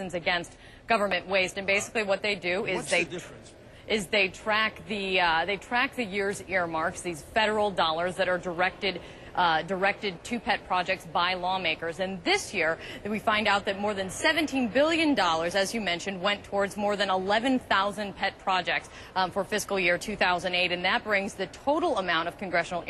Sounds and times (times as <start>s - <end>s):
Speech: 1.0s - 3.4s.